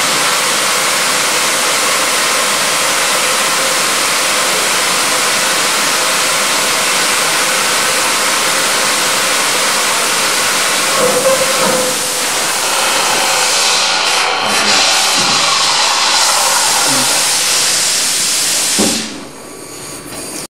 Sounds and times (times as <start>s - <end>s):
Fill (with liquid): 0.0s - 19.2s
Spray: 0.0s - 20.4s
Engine: 0.0s - 20.5s.